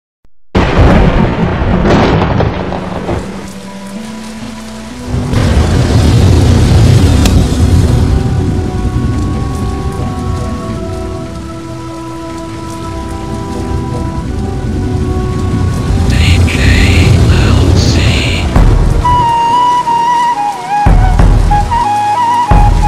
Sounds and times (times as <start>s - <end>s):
Explosion: 0.6s - 3.4s, 5.3s - 9.1s, 16.1s - 19.3s
Music: 1.6s - 22.8s.